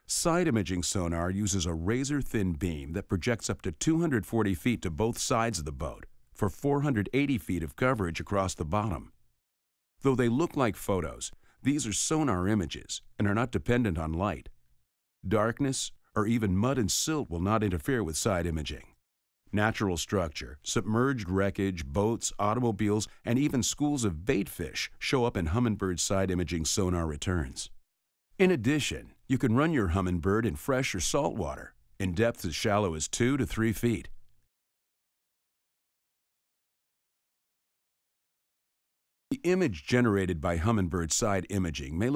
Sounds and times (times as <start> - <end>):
Speech: 0.0 - 9.2, 10.0 - 14.6, 15.3 - 27.8, 28.4 - 34.2, 39.3 - 42.1.